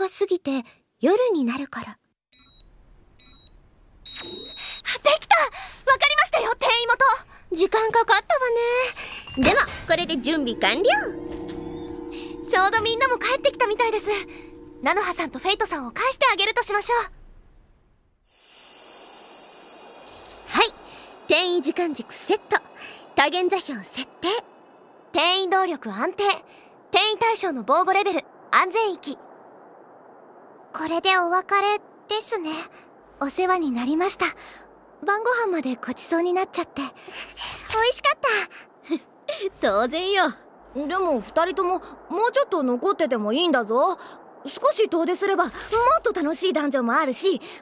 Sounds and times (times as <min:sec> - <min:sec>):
Speech: 0:00.0 - 0:02.0, 0:04.9 - 0:11.2, 0:12.4 - 0:17.1, 0:20.5 - 0:24.4, 0:25.2 - 0:29.2, 0:30.8 - 0:34.4, 0:35.0 - 0:37.0, 0:37.7 - 0:47.6.